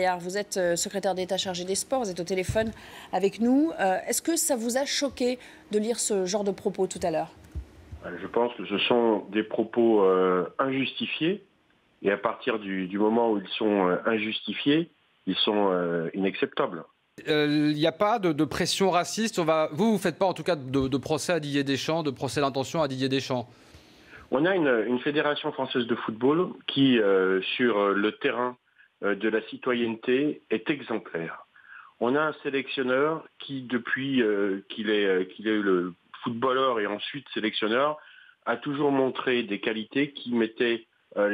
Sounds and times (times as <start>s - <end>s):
Speech: 8.0s - 23.5s, 24.3s - 41.3s.